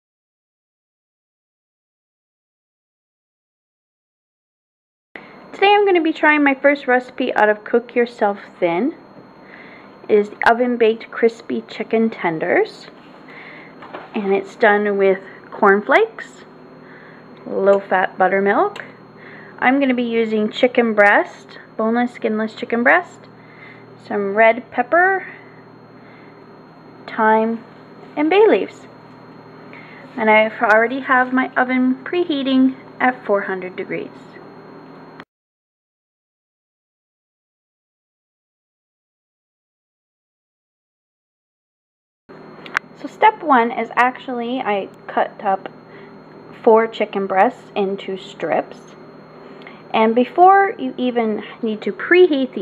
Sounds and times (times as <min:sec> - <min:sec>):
Speech: 0:05.6 - 0:09.1, 0:10.1 - 0:13.0, 0:14.2 - 0:16.5, 0:17.4 - 0:19.0, 0:19.6 - 0:23.3, 0:24.0 - 0:25.4, 0:27.1 - 0:28.9, 0:30.2 - 0:34.4, 0:43.0 - 0:45.8, 0:46.6 - 0:49.0, 0:49.9 - 0:52.6.